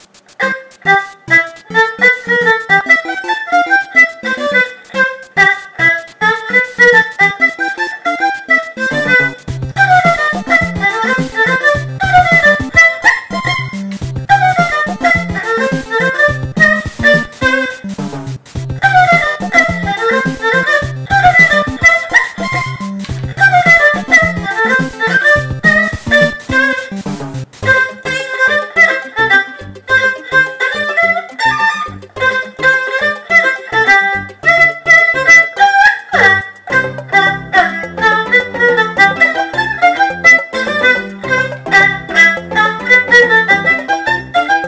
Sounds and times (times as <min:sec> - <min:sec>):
Music: 0:00.0 - 0:44.6.